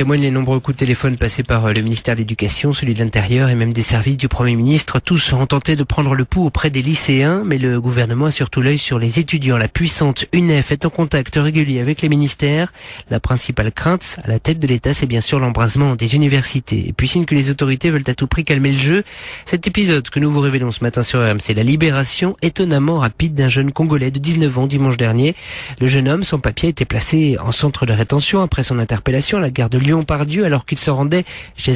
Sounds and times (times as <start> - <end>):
Speech: 0.0 - 31.7.